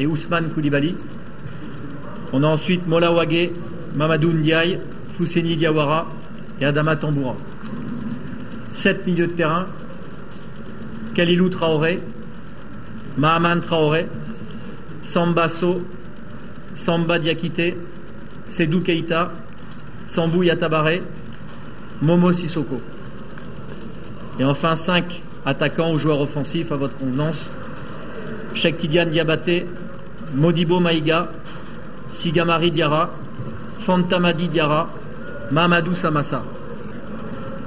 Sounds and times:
Speech: 0:00.0 - 0:01.1, 0:01.8 - 0:07.5, 0:08.7 - 0:09.8, 0:11.2 - 0:12.2, 0:13.2 - 0:14.2, 0:15.0 - 0:15.9, 0:16.8 - 0:19.4, 0:20.0 - 0:21.2, 0:22.0 - 0:22.9, 0:24.4 - 0:27.6, 0:28.2 - 0:31.4, 0:32.1 - 0:33.2, 0:33.8 - 0:36.6.

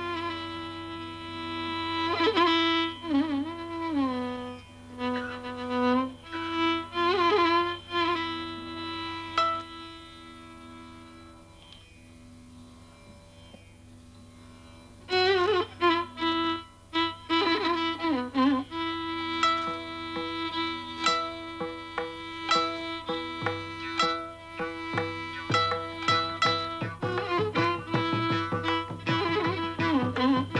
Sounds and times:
Violin, fiddle: 0:00.0 - 0:11.8, 0:14.7 - 0:30.5.

